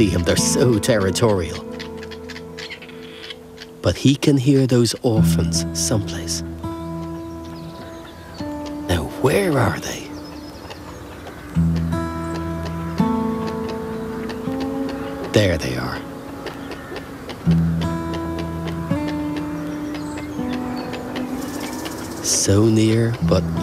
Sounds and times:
Speech: 0:00.0 - 0:01.6, 0:03.8 - 0:06.4, 0:08.9 - 0:10.1, 0:15.3 - 0:16.0, 0:22.2 - 0:23.6
Music: 0:00.0 - 0:23.6.

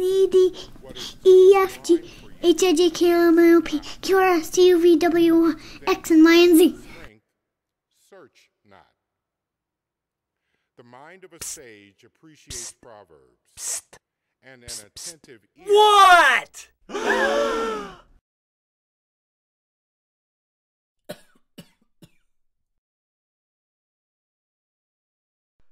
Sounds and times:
Sigh: 0:16.9 - 0:18.2.

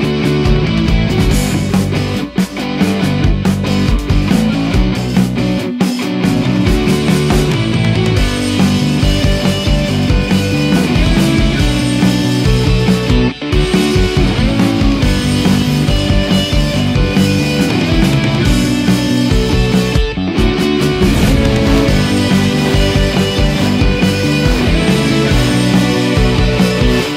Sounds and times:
Music: 0:00.0 - 0:27.1.

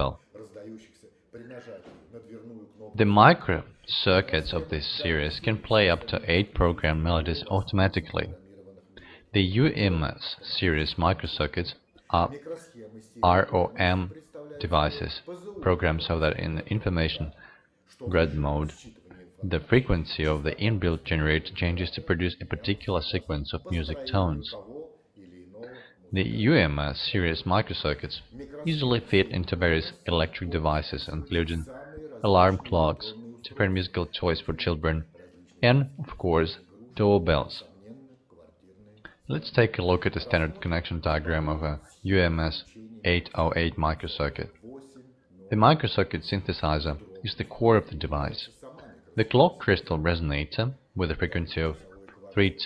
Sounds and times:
Speech: 0:00.0 - 0:52.6.

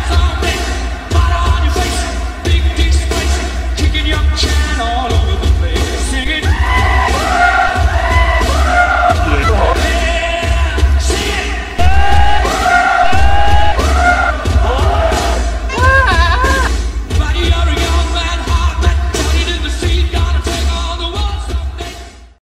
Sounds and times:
Music: 0:00.0 - 0:22.4.

